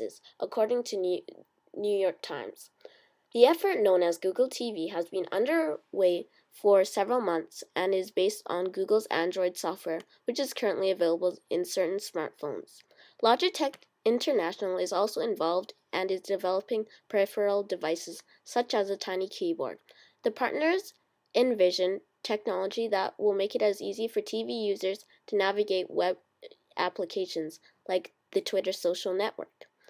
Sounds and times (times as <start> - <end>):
Speech: 0.0 - 2.8, 3.4 - 29.7.